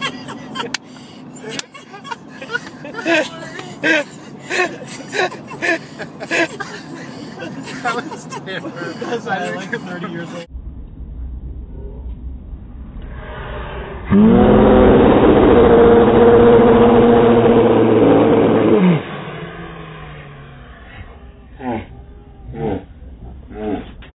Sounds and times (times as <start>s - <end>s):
Car: 0.0s - 24.1s.